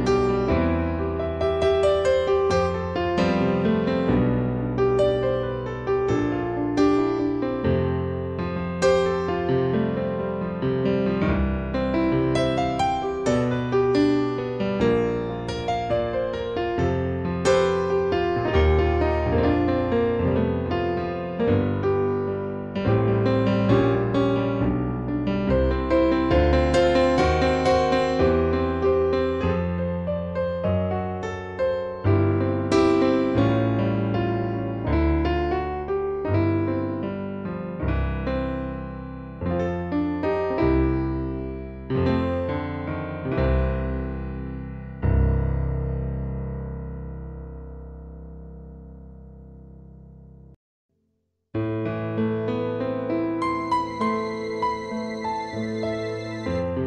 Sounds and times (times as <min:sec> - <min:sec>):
Music: 0:00.0 - 0:50.6, 0:51.6 - 0:56.8.